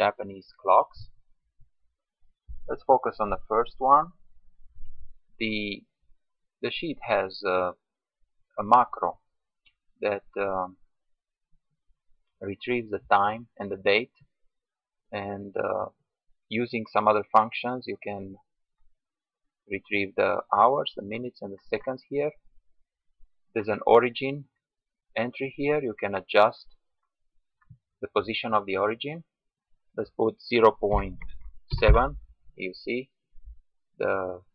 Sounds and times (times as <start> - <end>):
Speech: 0.0 - 1.2, 2.7 - 4.2, 5.4 - 6.0, 6.6 - 7.9, 8.6 - 9.3, 10.0 - 10.8, 12.4 - 14.3, 15.1 - 18.5, 19.7 - 22.4, 23.5 - 26.8, 28.0 - 29.4, 30.0 - 33.2, 34.0 - 34.5.